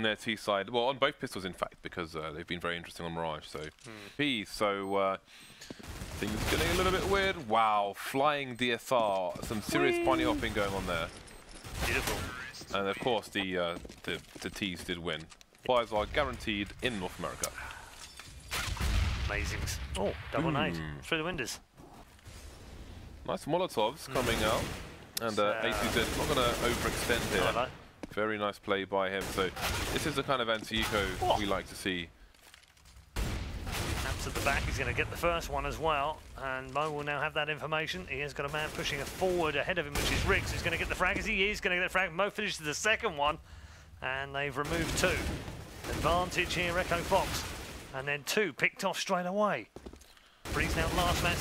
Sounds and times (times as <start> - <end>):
Speech: 0.0 - 5.2, 6.2 - 11.1, 11.9 - 17.5, 19.3 - 21.6, 23.3 - 24.6, 25.2 - 32.1, 34.0 - 43.4, 44.0 - 45.3, 45.9 - 47.4, 48.0 - 49.7, 50.6 - 51.4.